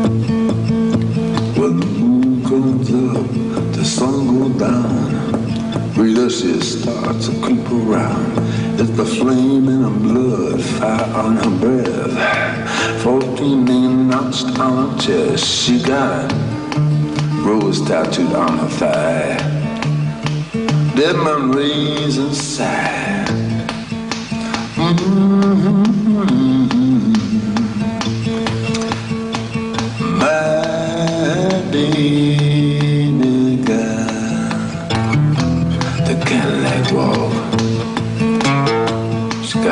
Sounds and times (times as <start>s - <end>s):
Music: 0.0s - 39.7s.